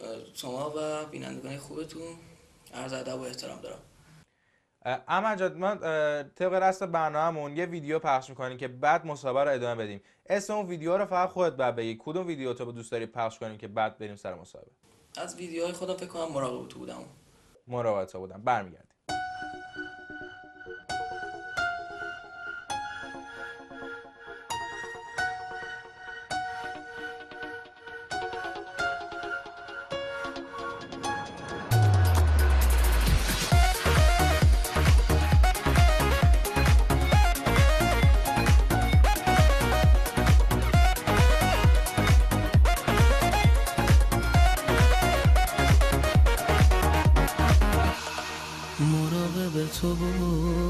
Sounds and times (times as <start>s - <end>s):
Speech: 0.0s - 3.8s, 4.8s - 19.0s.